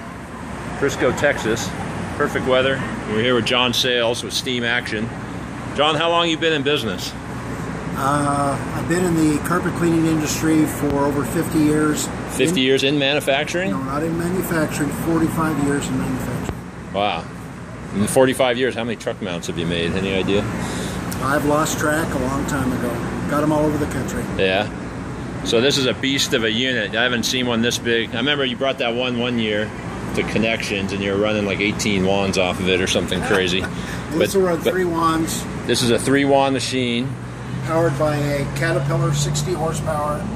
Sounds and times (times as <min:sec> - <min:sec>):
Speech: 0:08.0 - 0:17.3, 0:18.0 - 0:20.5, 0:25.5 - 0:40.3.